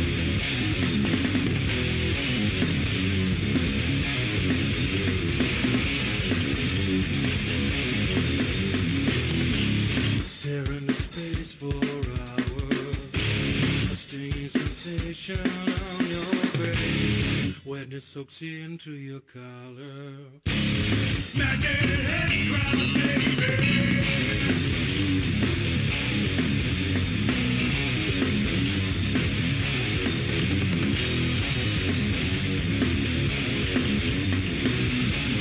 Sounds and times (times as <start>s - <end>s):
Music: 0.0s - 17.7s, 20.4s - 35.4s.